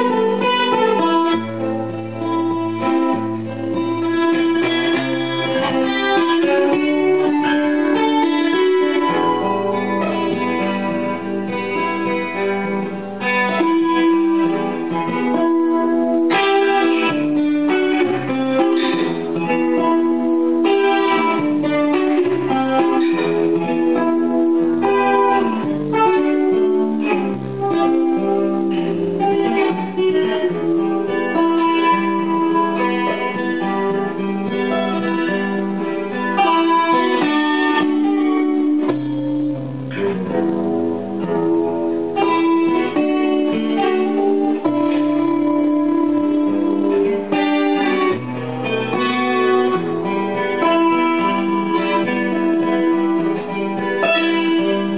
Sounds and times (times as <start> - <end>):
Strum: 0.0 - 54.9.